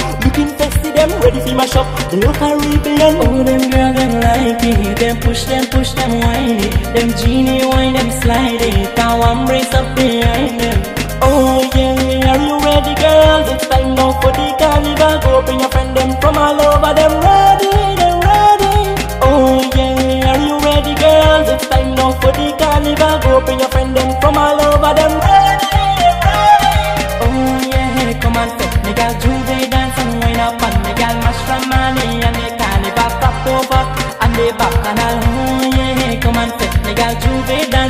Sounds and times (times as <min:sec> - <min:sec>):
Music: 0:00.0 - 0:37.9.